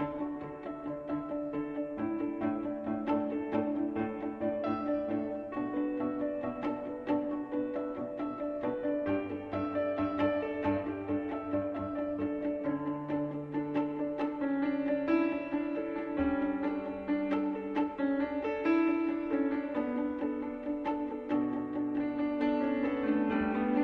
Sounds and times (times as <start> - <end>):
Music: 0.0 - 23.8.